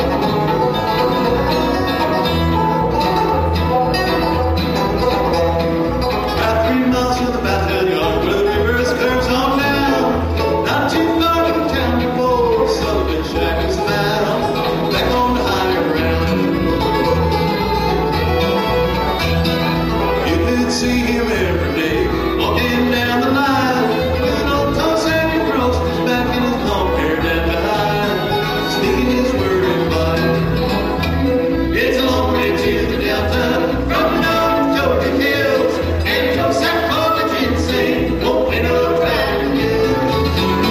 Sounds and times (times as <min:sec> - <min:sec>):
Country: 0:00.0 - 0:40.7.